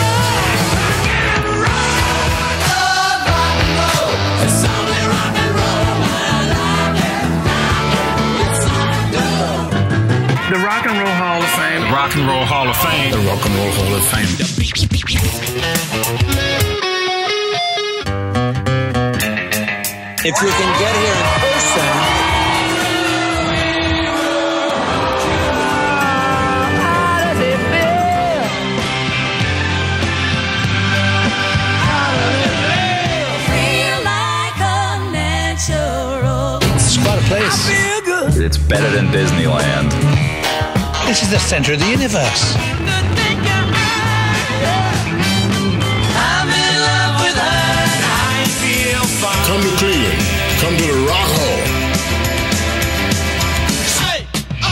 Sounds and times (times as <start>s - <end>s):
Rock and roll: 0.0s - 54.7s
Speech: 10.4s - 14.6s, 20.2s - 22.1s, 36.9s - 40.0s, 41.0s - 42.6s, 49.4s - 51.7s.